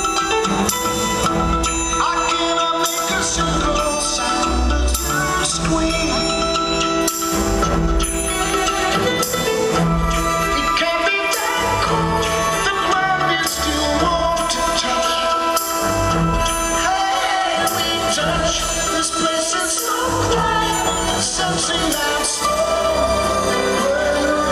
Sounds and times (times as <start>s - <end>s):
Independent music: 0.0s - 24.5s
Rhythm and blues: 0.0s - 24.5s.